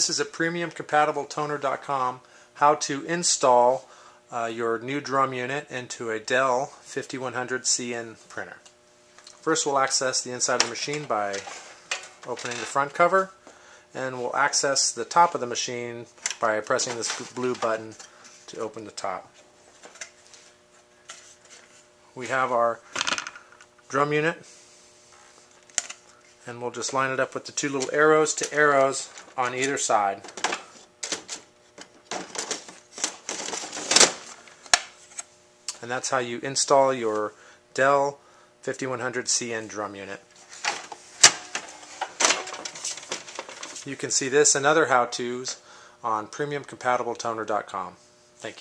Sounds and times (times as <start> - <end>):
Speech: 0.0 - 8.7, 9.4 - 11.6, 12.2 - 13.4, 14.0 - 19.4, 22.2 - 22.8, 23.9 - 24.5, 26.4 - 30.3, 35.7 - 40.3, 43.8 - 48.6.